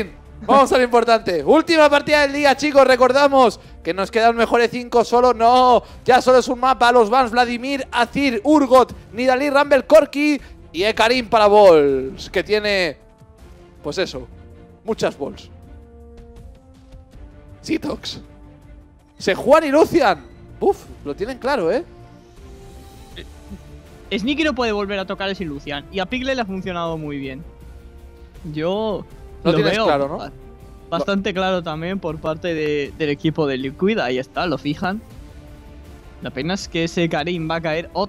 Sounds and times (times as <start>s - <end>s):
Speech: 0.0s - 13.0s, 13.8s - 14.3s, 14.9s - 15.5s, 17.6s - 18.2s, 19.2s - 21.8s, 24.1s - 27.4s, 28.5s - 30.3s, 30.9s - 35.0s, 36.2s - 38.0s
Music: 0.0s - 38.0s.